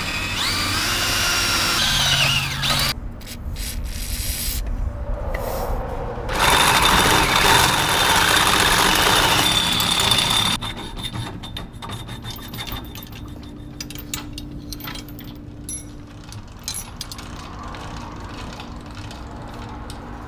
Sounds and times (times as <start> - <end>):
Drill: 0.0 - 3.0, 6.3 - 10.6.